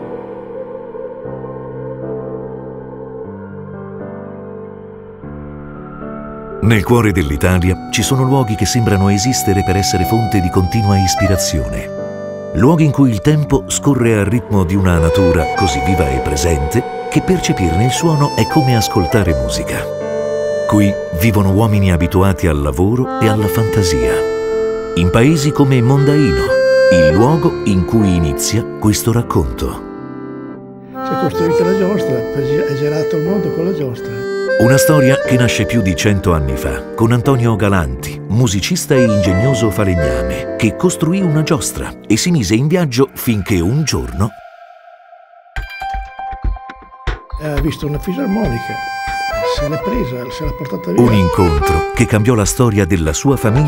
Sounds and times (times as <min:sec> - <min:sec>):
Music: 0:00.0 - 0:53.6
Speech: 0:06.6 - 0:11.9, 0:12.6 - 0:19.9, 0:20.7 - 0:24.2, 0:25.0 - 0:29.8, 0:31.1 - 0:44.4, 0:47.4 - 0:48.8, 0:49.4 - 0:53.6.